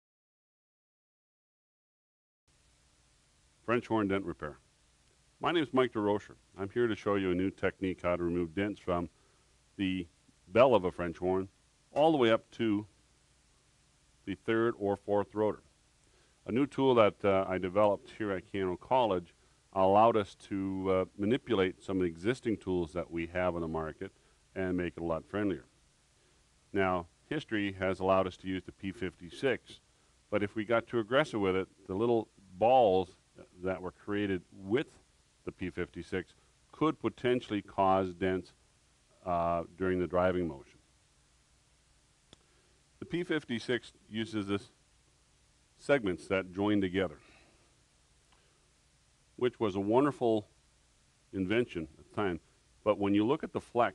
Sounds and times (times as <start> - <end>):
Speech: 3.6 - 4.6, 5.4 - 9.1, 9.8 - 12.9, 14.3 - 15.7, 16.4 - 25.7, 26.7 - 38.6, 39.2 - 40.8, 43.0 - 44.8, 45.8 - 47.3, 49.4 - 50.5, 51.3 - 53.9.